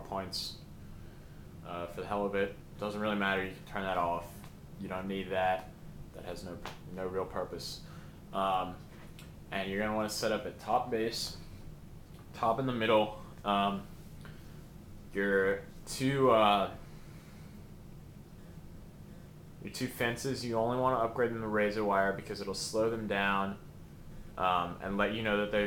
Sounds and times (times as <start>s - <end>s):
Speech: 0.0s - 0.6s, 1.6s - 7.8s, 8.4s - 8.8s, 9.5s - 11.4s, 12.3s - 13.9s, 15.1s - 16.8s, 19.6s - 23.6s, 24.4s - 25.6s.